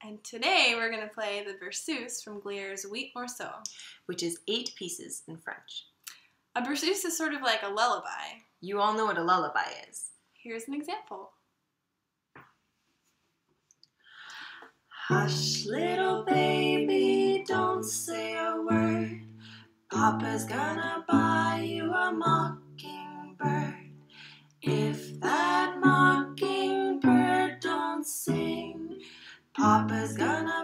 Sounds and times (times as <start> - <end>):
Speech: 0.0 - 5.9, 6.6 - 11.4
Lullaby: 15.1 - 19.4, 24.7 - 30.6.